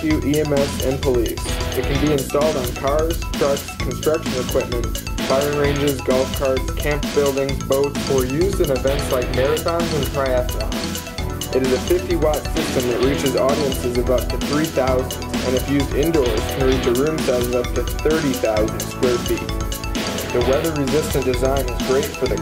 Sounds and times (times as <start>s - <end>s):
Speech: 0.0s - 10.6s, 11.6s - 19.4s, 20.4s - 22.4s
Music: 0.0s - 22.4s.